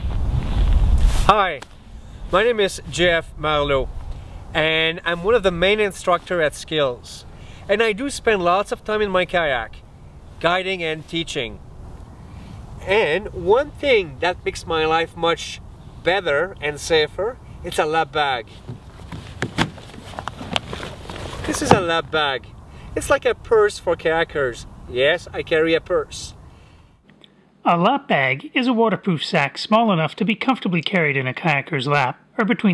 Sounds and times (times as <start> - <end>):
Speech: 1.3 - 1.6, 2.3 - 3.9, 4.6 - 9.8, 10.4 - 11.6, 12.8 - 18.6, 21.4 - 26.4, 27.6 - 32.7.